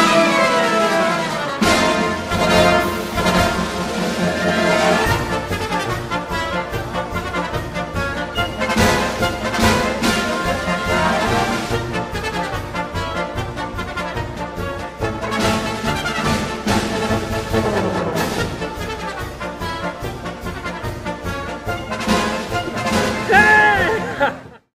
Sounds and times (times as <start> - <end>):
Music: 0.0 - 24.7.